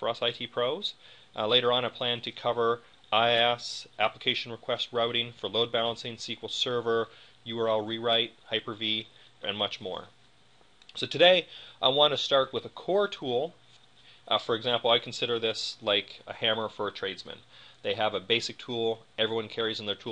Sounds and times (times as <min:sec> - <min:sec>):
Speech: 0:00.0 - 0:10.2, 0:11.0 - 0:13.6, 0:14.3 - 0:20.1.